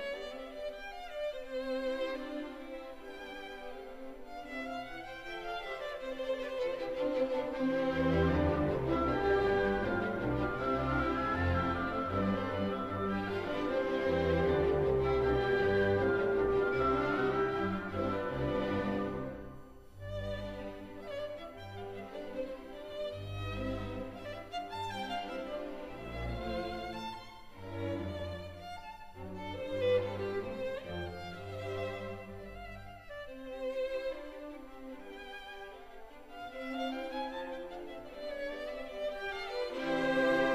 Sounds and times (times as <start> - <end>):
Orchestra: 0.0 - 40.5
Violin, fiddle: 0.0 - 40.5.